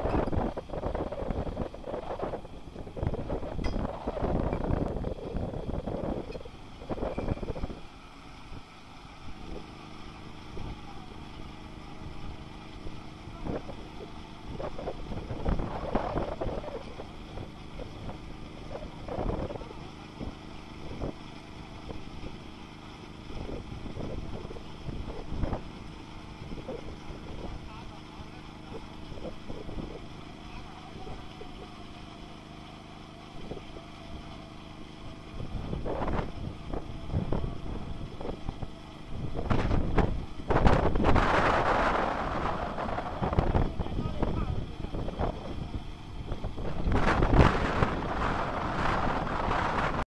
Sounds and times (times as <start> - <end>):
Speech: 27.4 - 28.9, 30.4 - 32.0, 43.6 - 45.8.